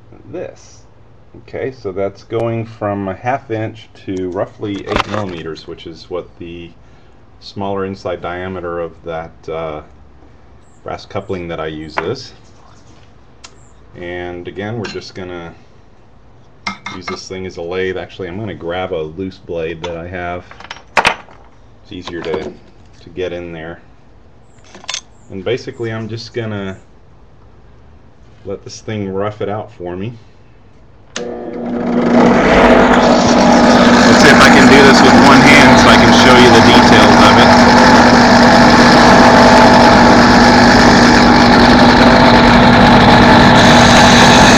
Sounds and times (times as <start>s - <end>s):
Speech: 0.1s - 6.8s, 7.4s - 9.9s, 10.8s - 12.4s, 14.0s - 15.6s, 16.8s - 20.5s, 21.8s - 23.9s, 25.3s - 26.9s, 28.4s - 30.3s, 34.0s - 37.6s.